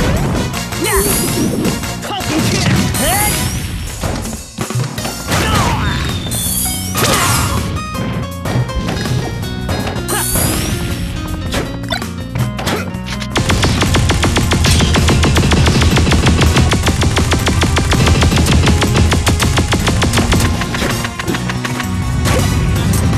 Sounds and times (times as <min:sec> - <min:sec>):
Music: 0:00.0 - 0:23.1
Speech: 0:00.8 - 0:01.2, 0:02.0 - 0:03.4, 0:05.4 - 0:06.0.